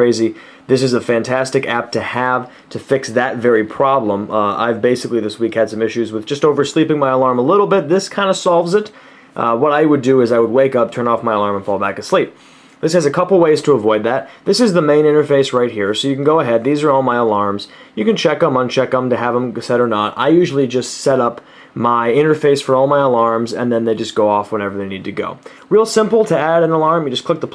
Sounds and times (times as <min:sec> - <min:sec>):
Speech: 0:00.0 - 0:27.5.